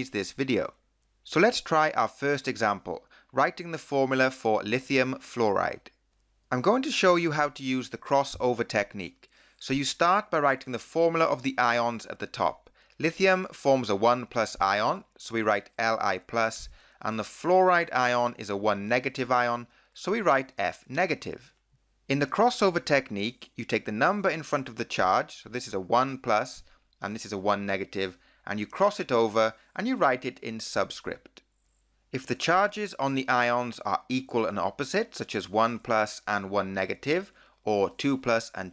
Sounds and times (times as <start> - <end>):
Speech: 0.0 - 21.5, 22.1 - 31.4, 32.2 - 38.7.